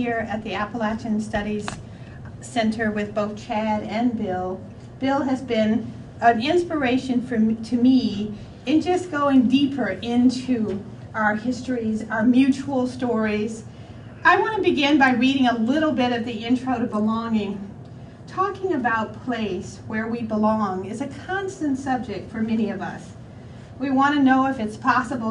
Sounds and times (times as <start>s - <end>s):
Speech: 0.0s - 1.8s, 2.4s - 13.6s, 14.2s - 17.7s, 18.3s - 23.2s, 23.8s - 25.3s.